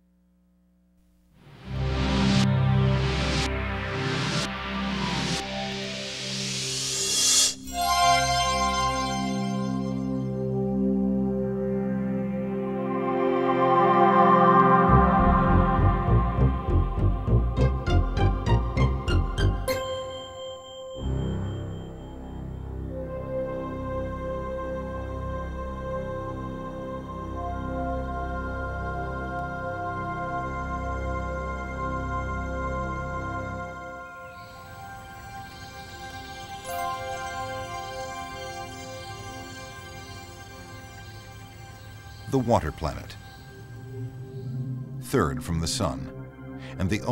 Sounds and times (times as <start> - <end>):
Music: 1.4 - 47.1.